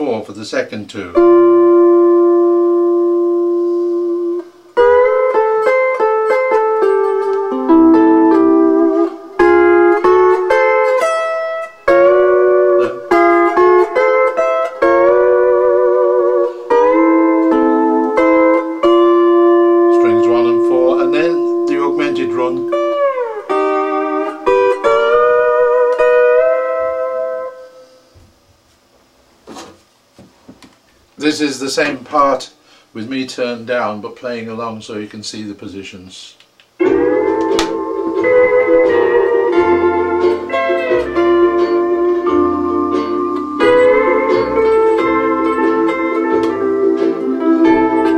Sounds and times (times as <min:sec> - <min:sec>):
Steel guitar, slide guitar: 0:01.2 - 0:28.0, 0:36.8 - 0:48.1.